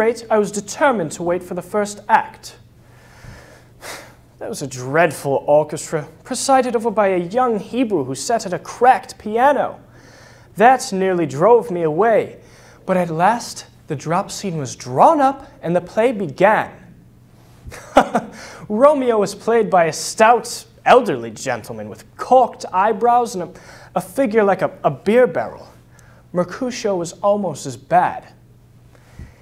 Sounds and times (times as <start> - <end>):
Narration, monologue: 0.0 - 29.4.